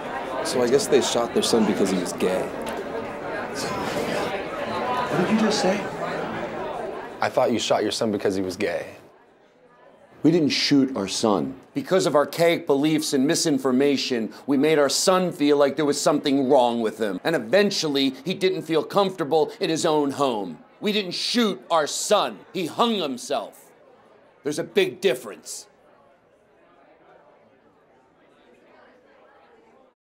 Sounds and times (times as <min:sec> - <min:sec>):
Speech: 0:00.0 - 0:02.6, 0:05.0 - 0:06.0, 0:07.2 - 0:09.1, 0:10.2 - 0:23.7, 0:24.4 - 0:25.7.